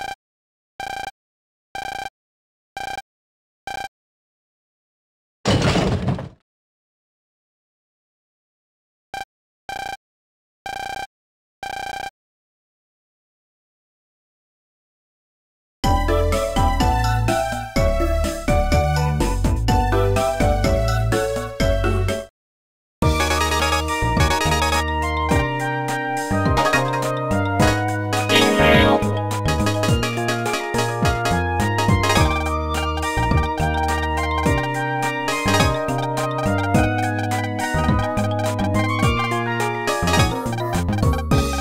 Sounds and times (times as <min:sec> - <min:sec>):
Music: 0:15.8 - 0:22.3, 0:23.0 - 0:41.6.